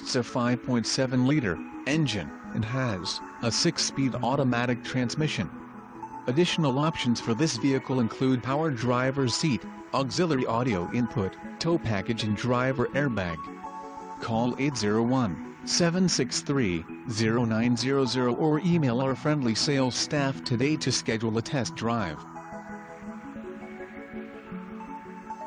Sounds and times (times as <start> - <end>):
Speech: 0.0 - 5.5, 6.3 - 13.5, 14.2 - 22.2
Music: 0.0 - 25.4.